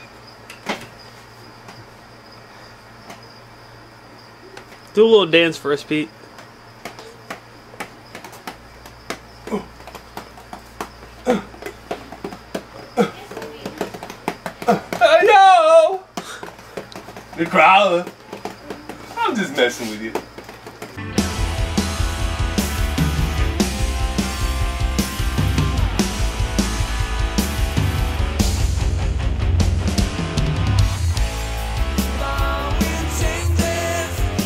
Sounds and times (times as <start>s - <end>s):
Music: 21.0s - 34.4s.